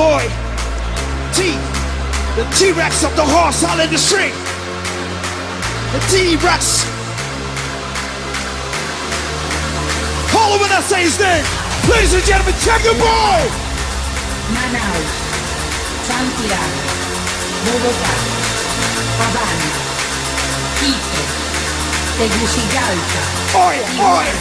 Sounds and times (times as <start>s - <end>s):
Electronic dance music: 0.0s - 24.4s.